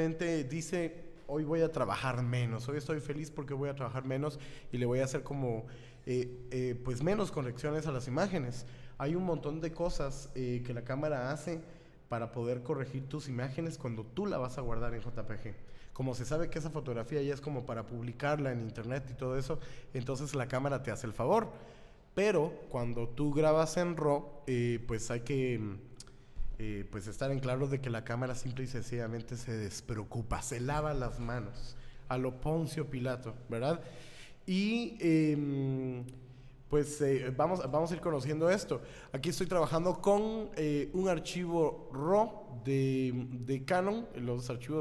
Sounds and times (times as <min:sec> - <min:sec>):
Speech: 0:00.0 - 0:21.6, 0:22.2 - 0:25.9, 0:26.6 - 0:33.8, 0:34.5 - 0:44.8.